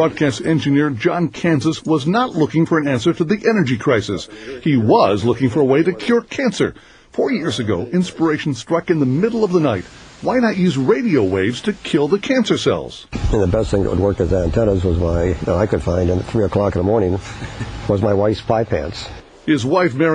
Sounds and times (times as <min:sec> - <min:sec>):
Speech: 0:00.0 - 0:17.3, 0:17.9 - 0:20.1.